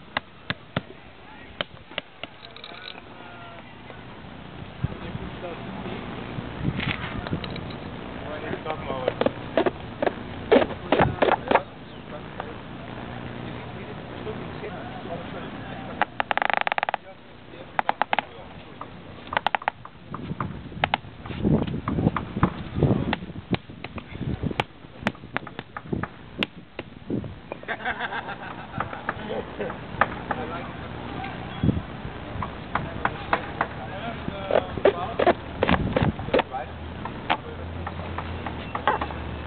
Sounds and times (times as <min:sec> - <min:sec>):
Speech: 0:08.2 - 0:09.2, 0:10.6 - 0:16.0, 0:30.3 - 0:31.6, 0:32.8 - 0:35.4, 0:36.3 - 0:37.8.